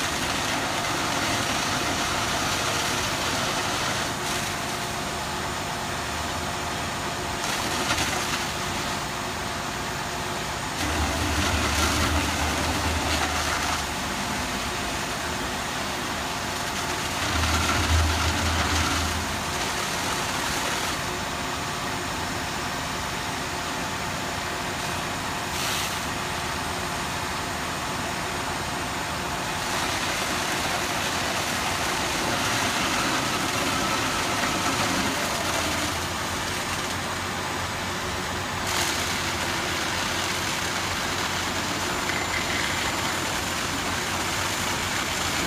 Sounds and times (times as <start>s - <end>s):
Vehicle: 0.0s - 45.4s.